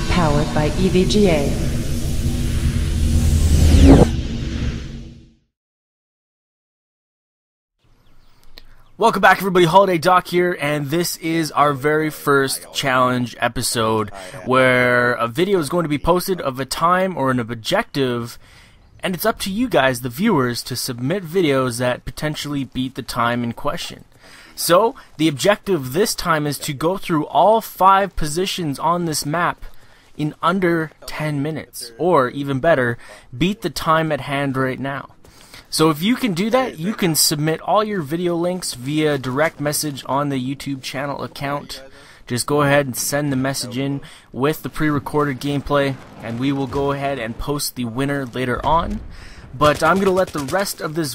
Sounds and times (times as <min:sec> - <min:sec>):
Speech: 0:00.1 - 0:01.6, 0:09.0 - 0:18.4, 0:19.0 - 0:35.1, 0:35.7 - 0:51.1.